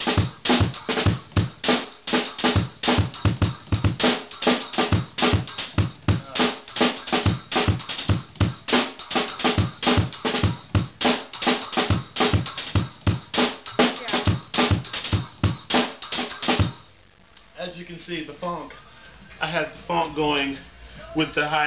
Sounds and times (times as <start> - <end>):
Drum: 0.0 - 17.0.